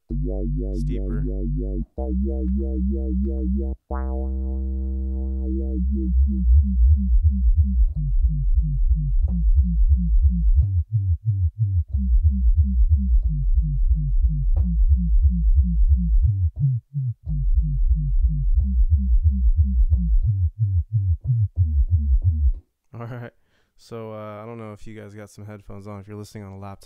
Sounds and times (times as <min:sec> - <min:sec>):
Dubstep: 0:00.1 - 0:01.8
Speech: 0:00.8 - 0:01.3, 0:22.9 - 0:26.8.